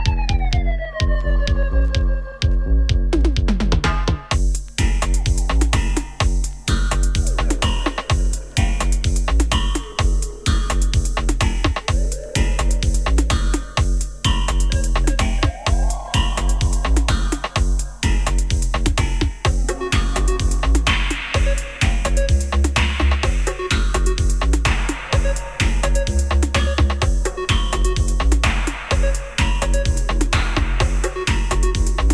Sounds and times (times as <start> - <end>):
Music: 0.0 - 32.1.